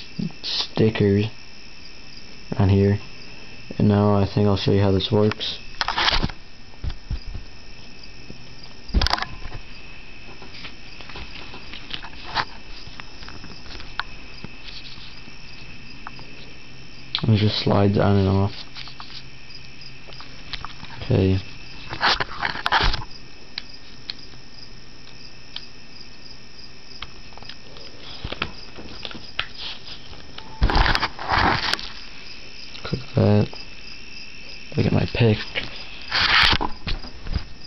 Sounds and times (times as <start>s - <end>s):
Speech: 0.2s - 1.4s, 2.5s - 3.1s, 3.7s - 5.6s, 17.2s - 18.6s, 21.0s - 21.5s, 32.8s - 33.6s, 34.7s - 35.6s.